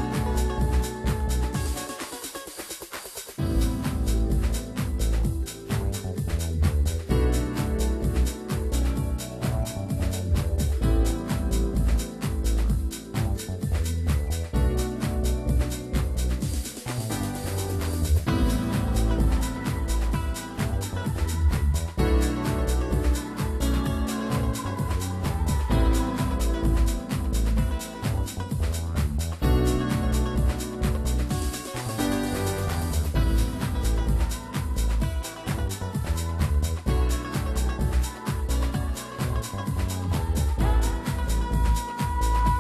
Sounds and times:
Music: 0.0s - 42.6s.

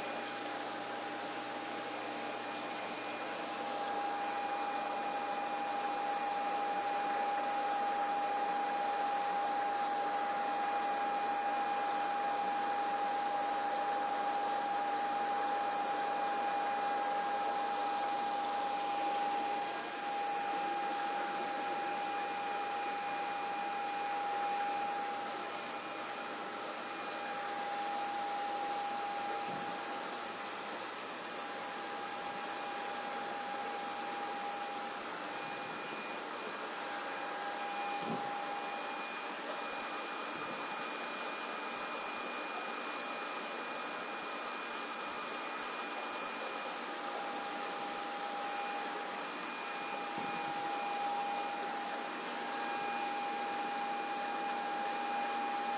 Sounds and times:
Stream: 0.0s - 55.7s.

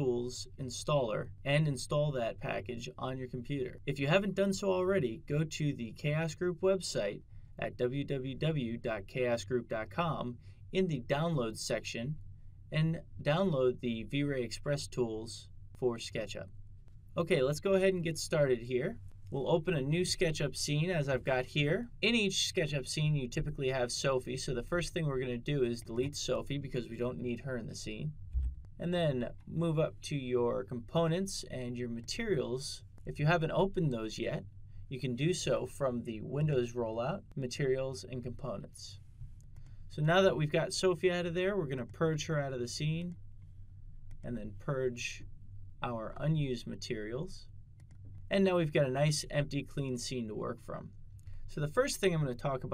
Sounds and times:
Speech: 0.0s - 16.5s, 17.2s - 28.2s, 28.8s - 39.0s, 39.9s - 43.2s, 44.2s - 47.5s, 48.3s - 52.7s.

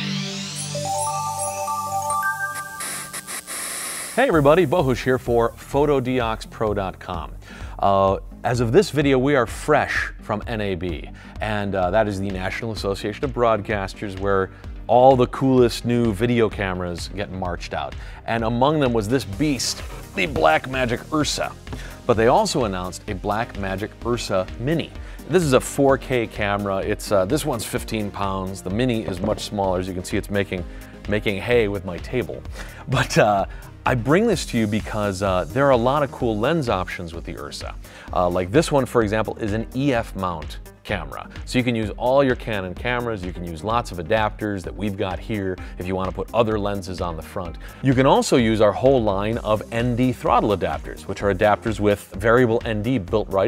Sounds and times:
Music: 0.0s - 53.4s
Speech: 4.2s - 53.4s.

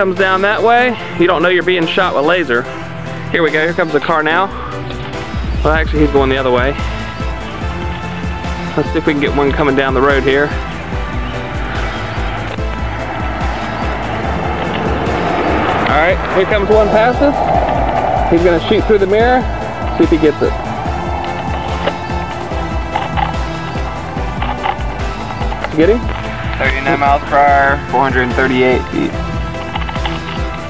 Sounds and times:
Speech: 0.0s - 2.6s, 3.3s - 4.5s, 18.3s - 20.6s, 26.6s - 29.2s
Music: 0.0s - 30.6s
Car: 4.5s - 30.6s.

